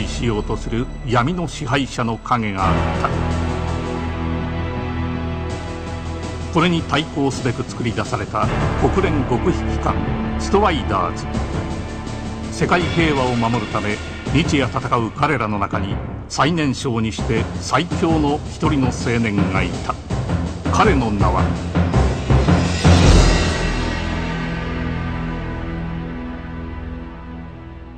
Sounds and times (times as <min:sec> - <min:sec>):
Speech: 0:00.0 - 0:03.2, 0:06.6 - 0:11.3, 0:12.5 - 0:20.0, 0:20.7 - 0:21.6
Music: 0:00.0 - 0:27.9.